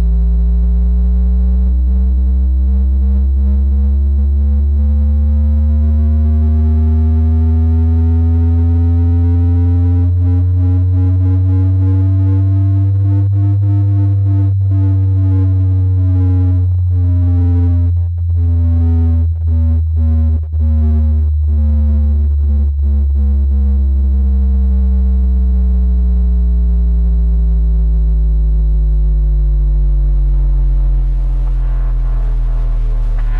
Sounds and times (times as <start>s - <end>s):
Electronic music: 10.1s - 22.7s, 30.0s - 33.4s.